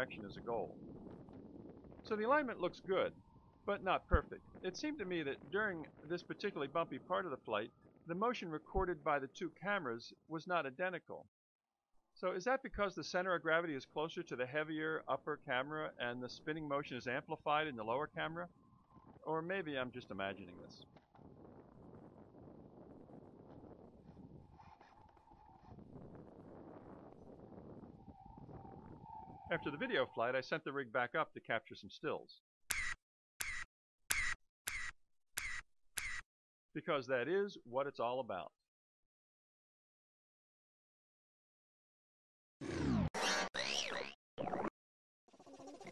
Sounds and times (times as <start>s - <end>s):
Speech synthesizer: 0.0s - 0.7s, 2.1s - 3.1s, 3.7s - 11.2s, 12.2s - 18.5s, 19.3s - 20.8s, 29.5s - 32.4s, 36.8s - 38.5s
Camera: 32.7s - 36.2s.